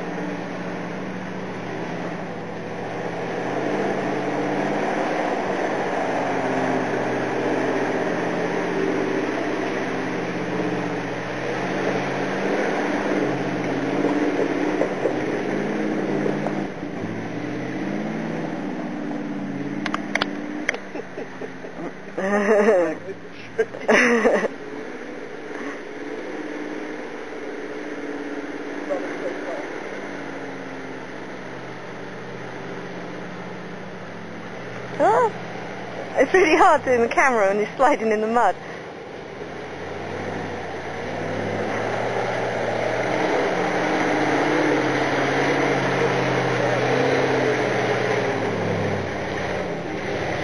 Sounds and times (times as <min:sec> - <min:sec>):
Truck: 0:00.0 - 0:50.4
Speech: 0:28.9 - 0:29.7, 0:35.0 - 0:35.4, 0:36.2 - 0:38.6.